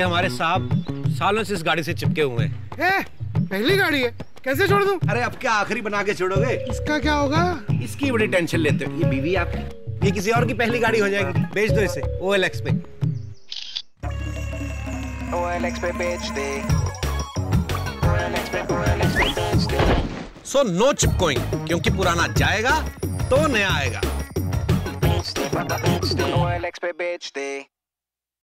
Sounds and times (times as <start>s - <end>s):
Music: 0.0s - 13.3s, 14.0s - 20.0s, 20.9s - 26.9s.